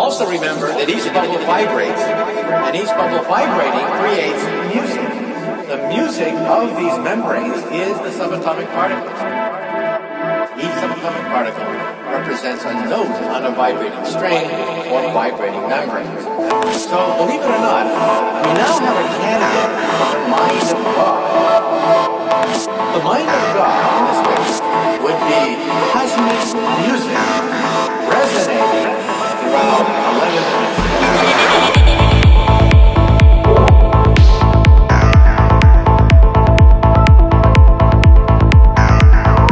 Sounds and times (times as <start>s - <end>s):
Speech: 0.0s - 9.3s, 10.5s - 21.4s, 22.9s - 32.0s
Music: 0.0s - 39.5s.